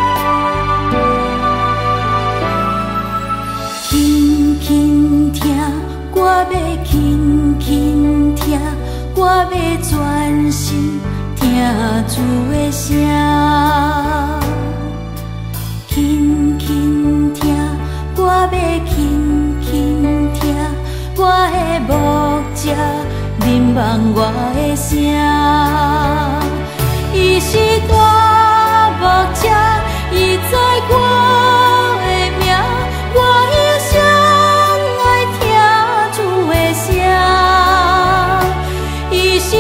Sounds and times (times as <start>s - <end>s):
Christmas music: 0.0s - 39.6s.